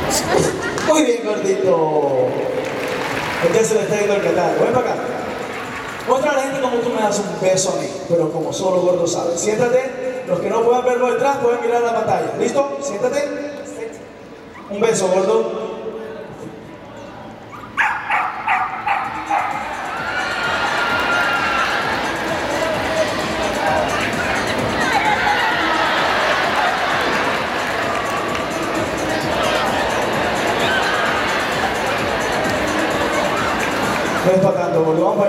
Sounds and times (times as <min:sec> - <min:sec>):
Music: 0:02.3 - 0:09.7, 0:16.3 - 0:35.2
Bow-wow: 0:17.6 - 0:19.6.